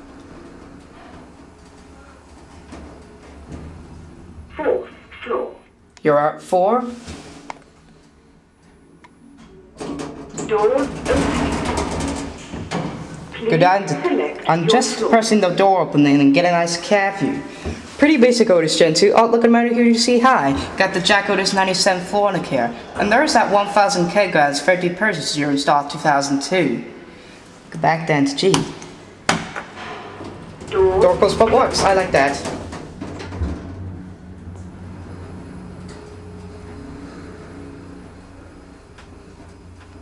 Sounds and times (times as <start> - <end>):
Speech: 4.6 - 7.0, 13.4 - 26.9, 27.7 - 28.7, 30.7 - 32.5.